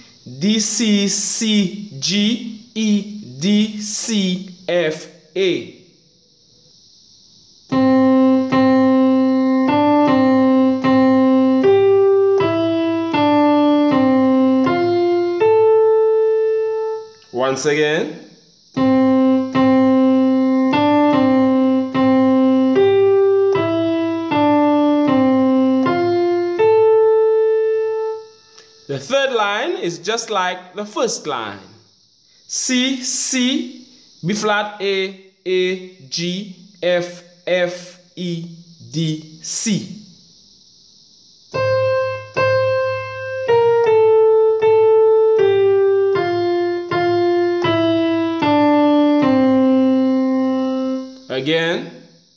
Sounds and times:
Speech: 0:00.3 - 0:05.8, 0:17.4 - 0:18.2, 0:28.9 - 0:31.8, 0:32.5 - 0:40.0, 0:51.3 - 0:52.0
Piano: 0:07.7 - 0:17.5, 0:18.8 - 0:28.9, 0:41.6 - 0:51.4.

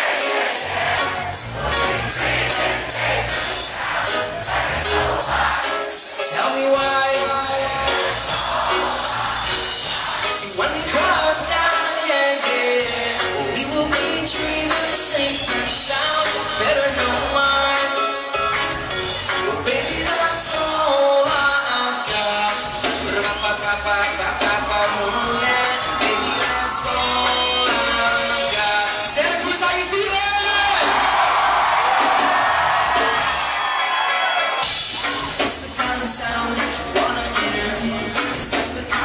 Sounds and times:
Cheering: 0:00.0 - 0:11.8, 0:23.0 - 0:36.1
Music: 0:00.0 - 0:39.0
Speech: 0:29.1 - 0:30.9.

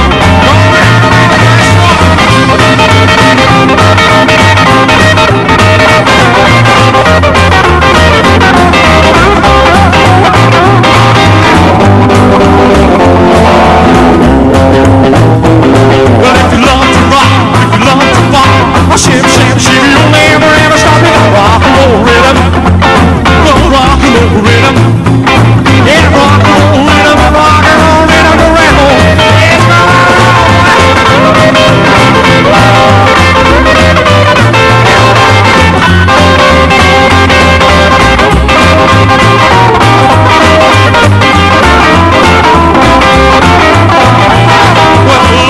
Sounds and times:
Rock and roll: 0:00.0 - 0:45.5.

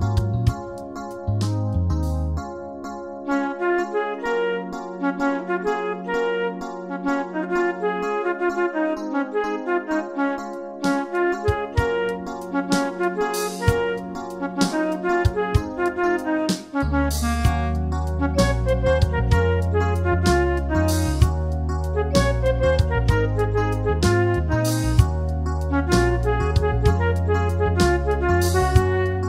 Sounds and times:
Clarinet: 0:03.2 - 0:29.2.

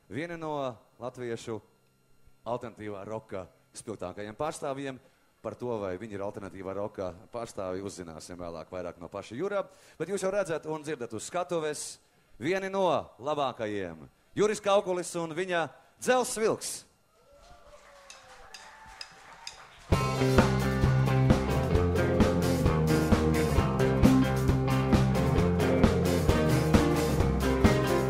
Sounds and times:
Speech: 0:00.1 - 0:01.7, 0:02.4 - 0:16.9.

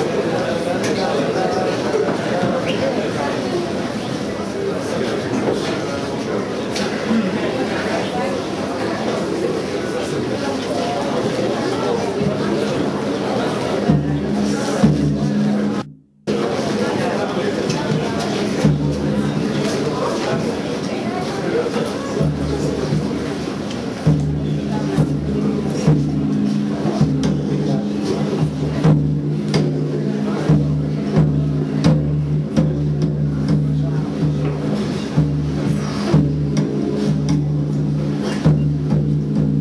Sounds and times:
Speech: 0:00.0 - 0:39.6
Bass drum: 0:13.8 - 0:16.5, 0:17.9 - 0:19.8, 0:22.2 - 0:39.6.

